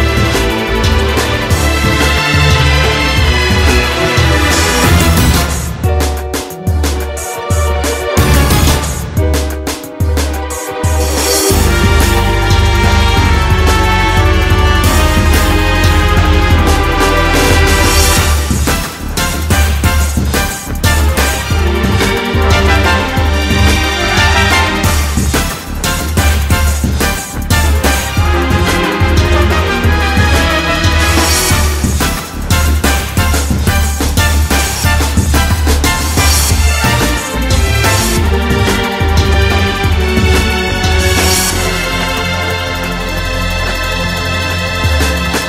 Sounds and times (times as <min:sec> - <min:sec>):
Video game music: 0:00.0 - 0:45.4.